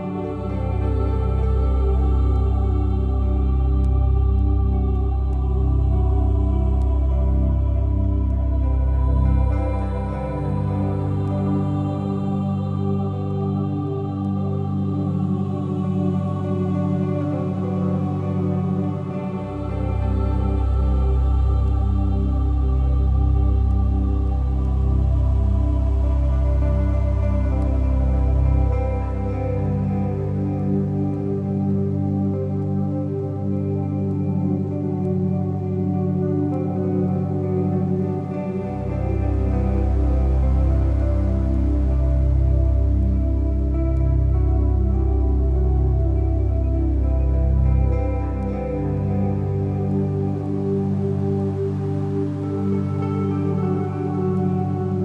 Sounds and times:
Music: 0.0s - 55.0s.

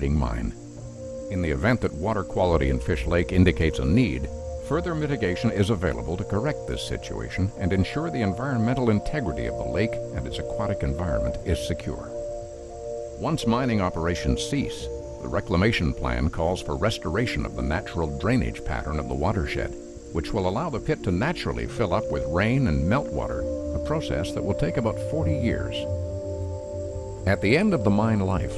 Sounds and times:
Speech: 0.0s - 0.6s, 1.3s - 12.1s, 13.2s - 25.9s, 27.3s - 28.5s
Music: 0.0s - 28.5s.

